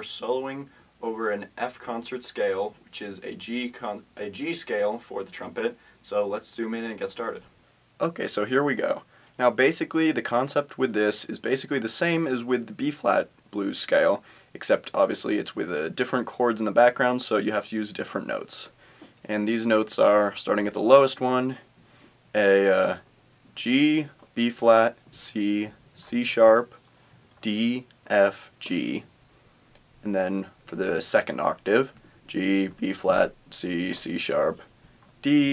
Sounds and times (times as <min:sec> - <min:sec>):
Speech: 0:00.0 - 0:21.7, 0:22.3 - 0:23.0, 0:23.6 - 0:26.8, 0:27.4 - 0:29.1, 0:30.0 - 0:35.5.